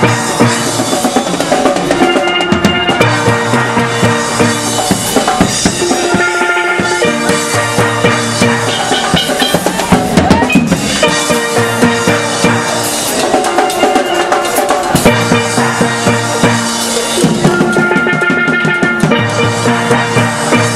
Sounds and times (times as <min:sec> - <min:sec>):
Music: 0:00.0 - 0:20.7.